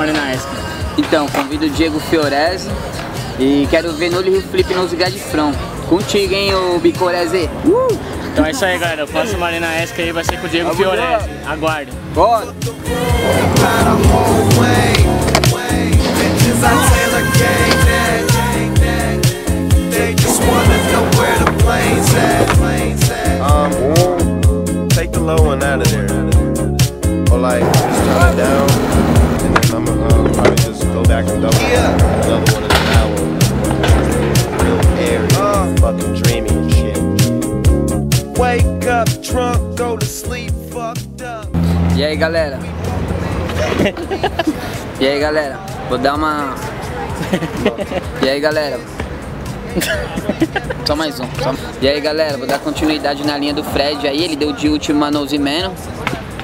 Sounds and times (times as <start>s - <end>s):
Skateboard: 20.2s - 22.7s, 31.5s - 35.0s.